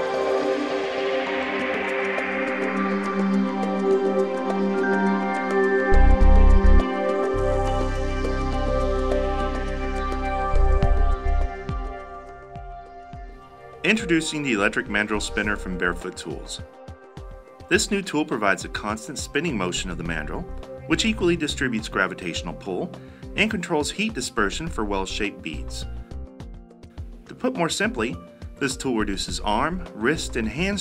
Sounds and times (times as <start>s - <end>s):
Music: 0.0s - 30.8s
Speech: 13.9s - 16.7s, 17.7s - 25.9s, 27.3s - 30.8s.